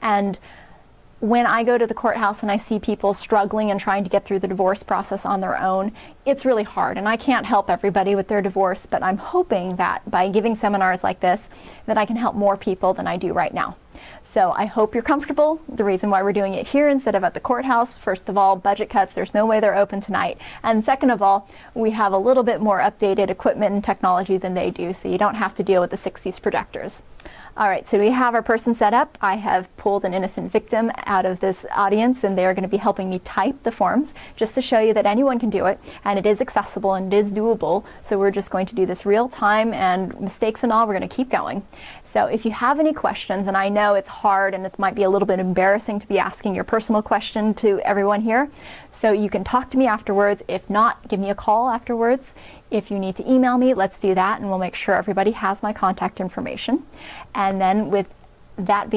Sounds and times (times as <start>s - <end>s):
Speech: 0.0s - 0.4s, 1.2s - 27.0s, 27.6s - 58.9s.